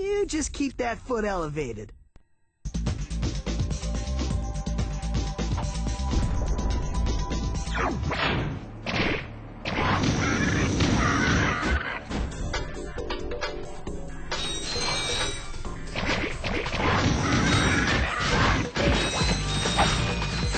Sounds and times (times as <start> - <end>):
Music: 2.6 - 20.5.